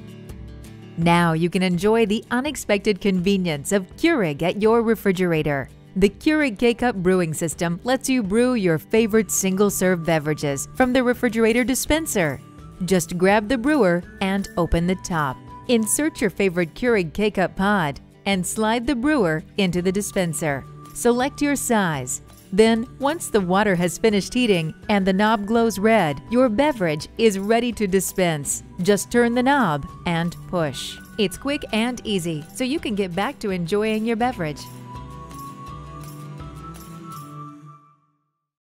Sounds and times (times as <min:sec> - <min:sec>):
Music: 0:00.0 - 0:38.6
Speech: 0:01.0 - 0:34.7.